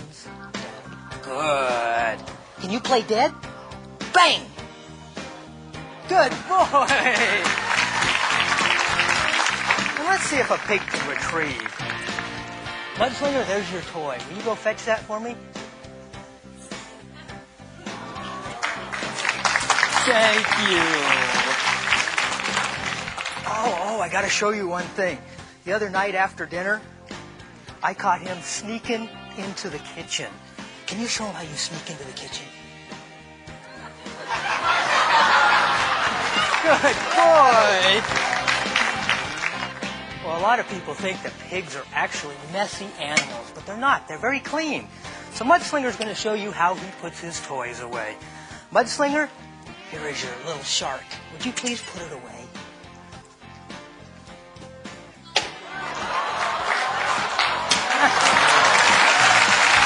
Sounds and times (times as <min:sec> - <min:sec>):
Music: 0:00.0 - 0:59.8.